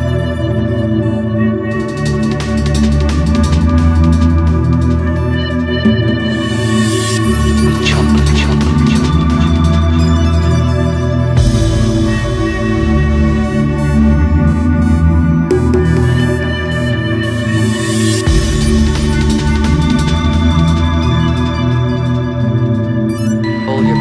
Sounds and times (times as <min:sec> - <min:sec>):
Music: 0:00.0 - 0:24.0.